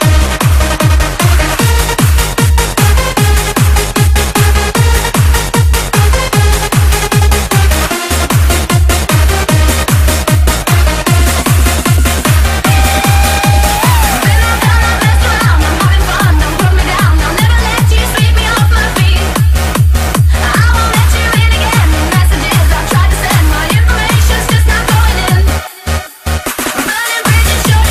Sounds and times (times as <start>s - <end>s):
Techno: 0.0s - 27.9s.